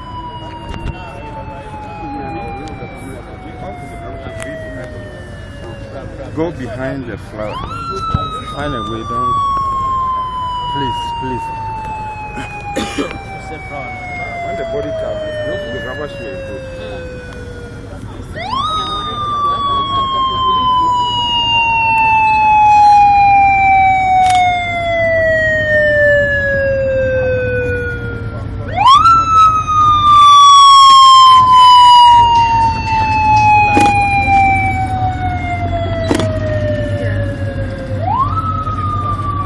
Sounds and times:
Outside, urban or manmade: 0.0 - 39.4.

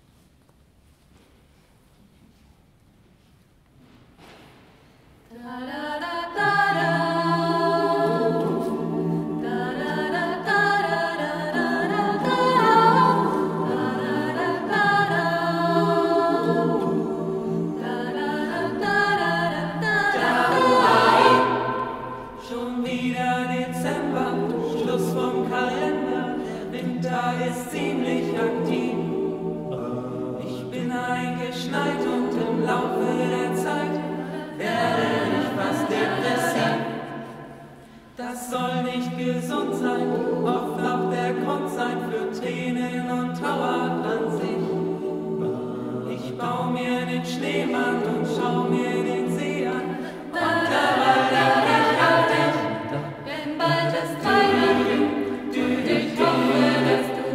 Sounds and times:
Music: 5.3 - 57.3.

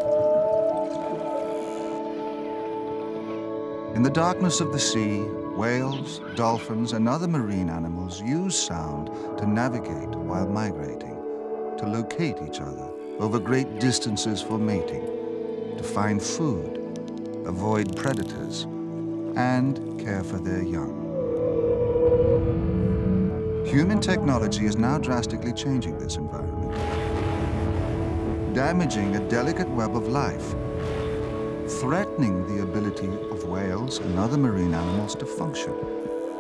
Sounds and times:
Music: 0.0 - 36.4
Speech: 4.0 - 11.2, 11.8 - 15.0, 15.8 - 16.8, 17.5 - 18.7, 19.4 - 20.9, 23.7 - 26.7, 28.5 - 30.5, 31.7 - 35.8.

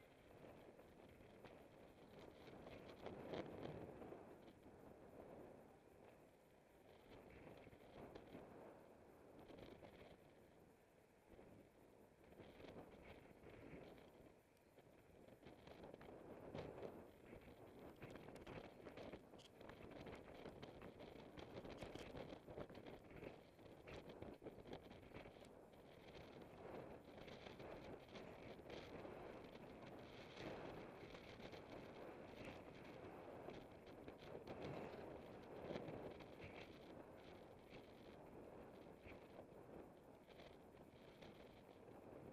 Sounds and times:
Bicycle: 0.0 - 42.3.

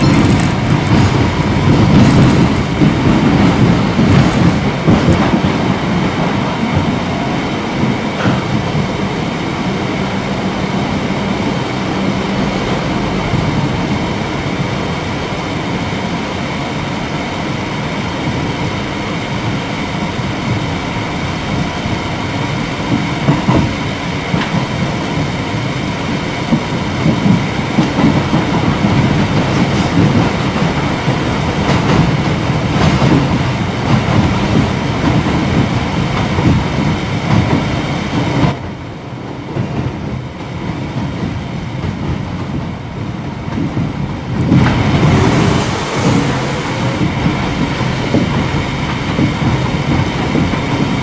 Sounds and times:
Clickety-clack: 0.0 - 7.2, 7.8 - 9.0, 22.8 - 51.0
Railroad car, train wagon: 0.0 - 51.0
Subway, metro, underground: 0.0 - 51.0
Train: 0.0 - 51.0.

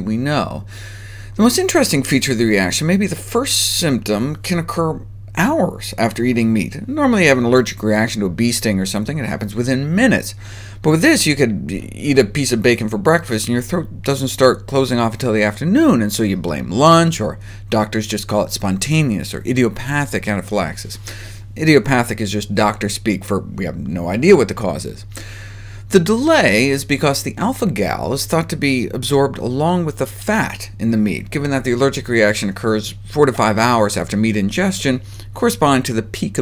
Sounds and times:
Speech: 0.0 - 0.7, 1.4 - 21.0, 21.6 - 25.1, 25.9 - 36.4.

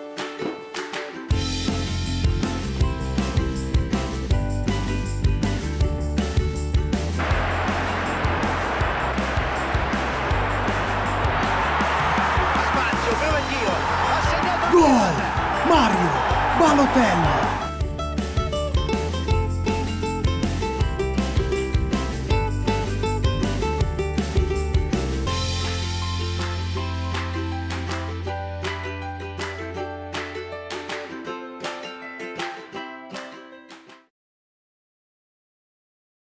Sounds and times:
Music: 0.0 - 34.1.

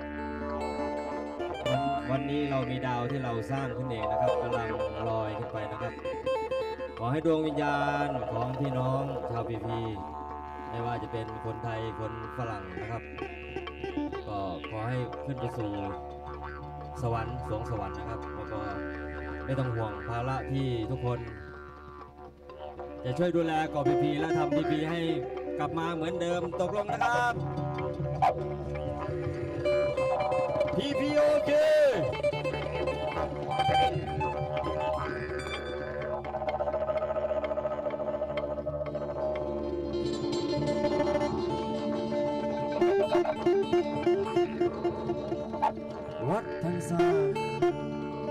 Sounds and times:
Music: 0.0 - 48.3
Speech: 1.7 - 6.1, 7.0 - 10.1, 10.7 - 13.1, 14.2 - 16.0, 17.0 - 18.8, 19.5 - 21.2, 23.0 - 27.4, 30.7 - 32.6, 46.2 - 47.5.

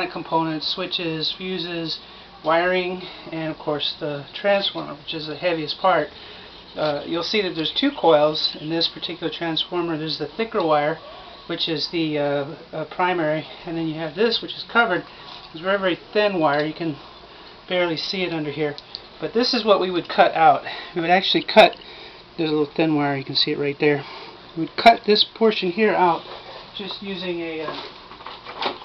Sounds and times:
Speech: 0.0 - 6.1, 6.8 - 17.0, 17.7 - 21.8, 22.4 - 27.9.

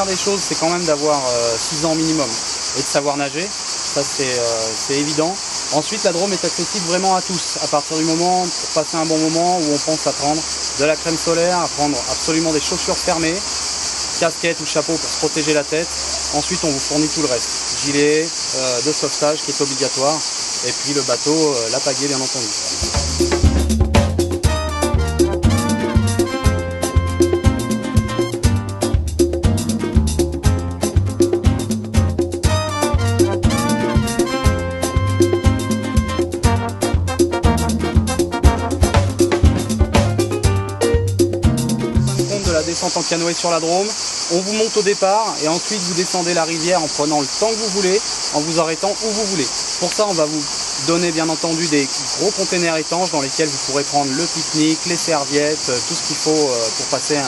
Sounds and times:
Music: 0.0 - 2.2, 22.7 - 43.1
Speech: 0.0 - 13.4, 14.2 - 22.7, 42.3 - 57.2.

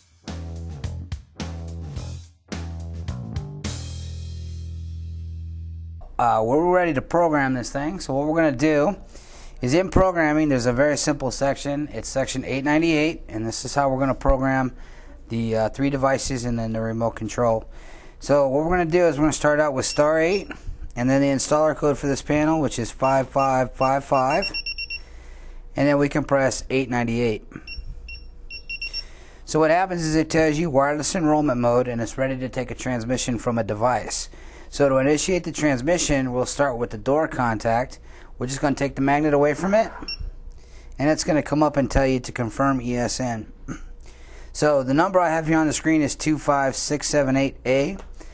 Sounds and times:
Speech: 6.2 - 9.0, 9.6 - 24.6, 25.8 - 27.5, 29.5 - 40.1, 41.0 - 43.5, 44.6 - 48.0.

